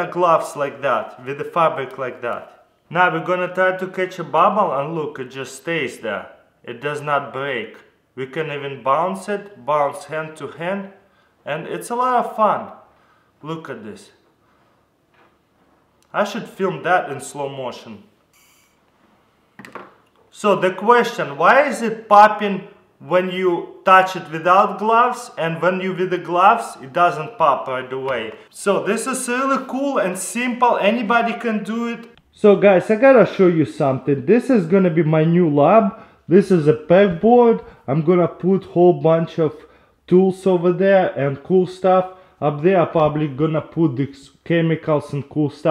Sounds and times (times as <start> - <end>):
Speech: 0.0 - 12.8, 13.4 - 14.2, 16.0 - 18.1, 20.3 - 45.7.